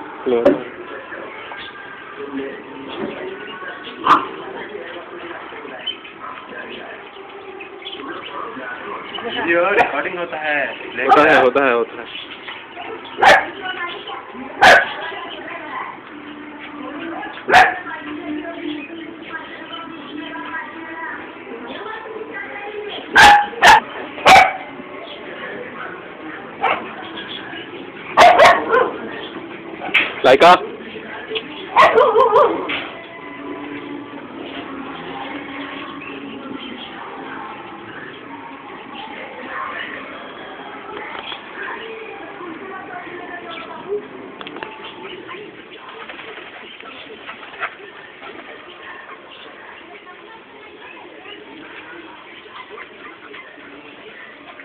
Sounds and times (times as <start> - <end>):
Speech: 0.0 - 23.8, 34.9 - 54.6
Domestic animals, pets: 21.7 - 30.1, 31.3 - 54.6.